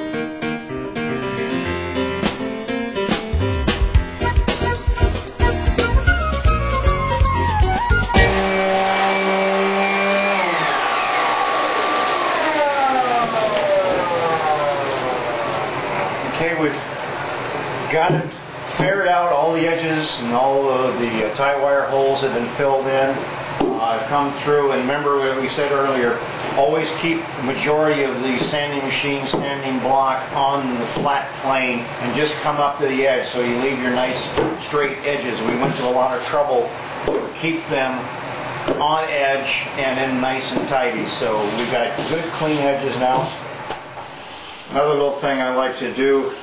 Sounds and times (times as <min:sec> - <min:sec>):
Speech: 0:16.3 - 0:16.9, 0:17.9 - 0:23.2, 0:23.8 - 0:36.8, 0:37.4 - 0:38.1, 0:38.8 - 0:43.4, 0:44.7 - 0:46.4.